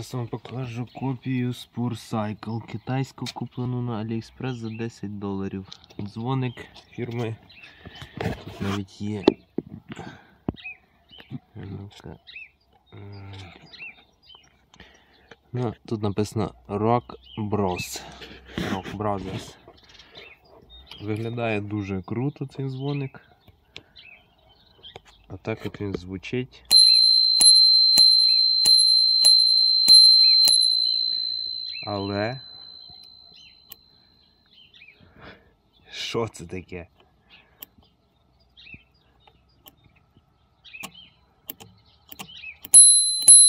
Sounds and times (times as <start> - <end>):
Speech: 0.0 - 7.4, 8.6 - 9.4, 11.3 - 12.2, 12.9 - 13.7, 15.5 - 19.6, 21.0 - 23.2, 25.3 - 26.7, 35.9 - 37.0.